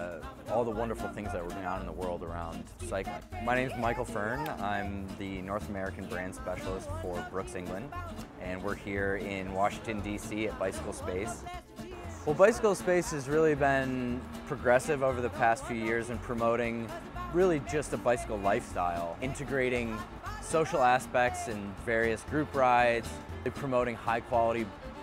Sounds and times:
Speech: 0.0 - 24.7
Music: 0.0 - 25.0.

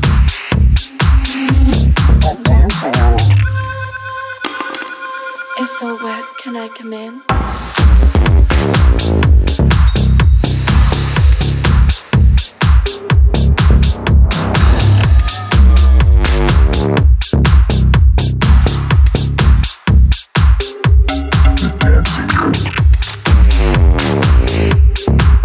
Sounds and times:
Music: 0.0 - 25.4
Speech: 2.2 - 3.4, 5.6 - 7.2, 21.6 - 22.8.

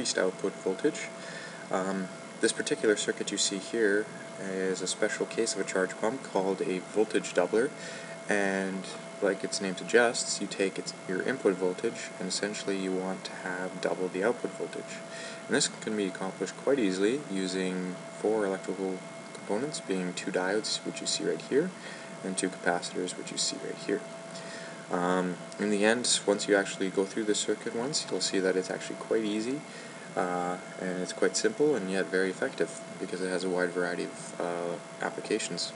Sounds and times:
Speech: 0.0 - 24.1, 24.9 - 35.7.

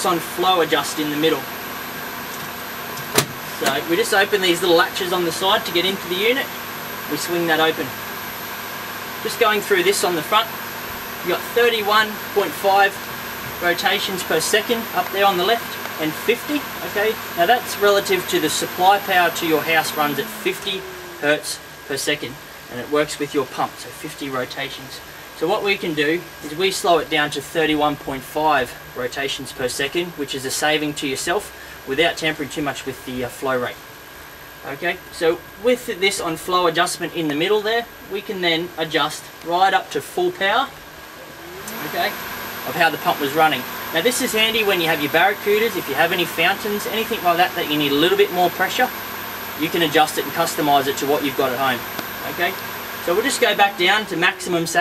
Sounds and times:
Speech: 0.0 - 1.5, 3.6 - 6.5, 7.1 - 8.0, 9.2 - 10.6, 11.2 - 13.0, 13.6 - 33.8, 34.6 - 40.8, 41.4 - 49.0, 49.6 - 54.8.

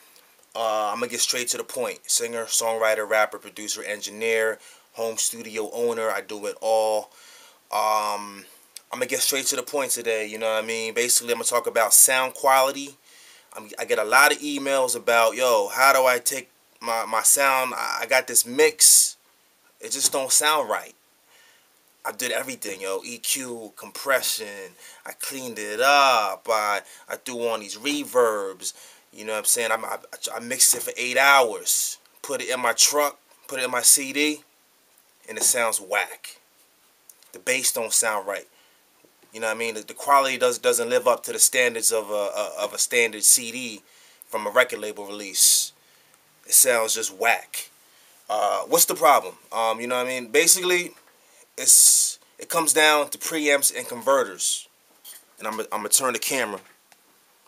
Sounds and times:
Speech: 0.6 - 7.1, 7.7 - 13.0, 13.6 - 19.2, 19.8 - 21.0, 22.0 - 34.4, 35.3 - 36.4, 37.3 - 38.5, 39.3 - 45.8, 46.5 - 47.7, 48.3 - 51.0, 51.6 - 54.7, 55.4 - 56.7.

